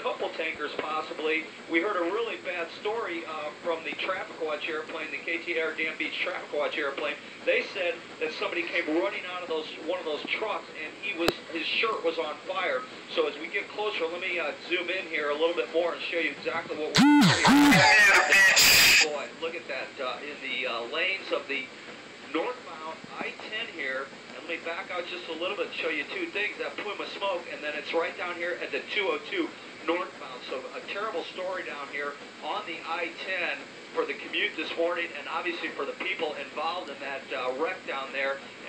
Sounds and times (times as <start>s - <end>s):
Speech: 0.0s - 21.7s, 22.3s - 38.6s.